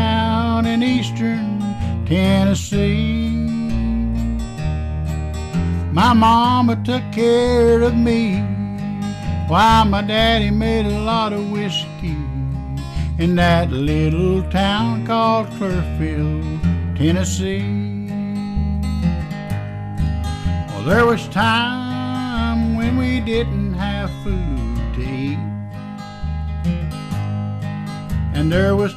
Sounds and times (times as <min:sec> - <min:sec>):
Bluegrass: 0:00.0 - 0:28.9
Rhythm and blues: 0:00.0 - 0:28.9.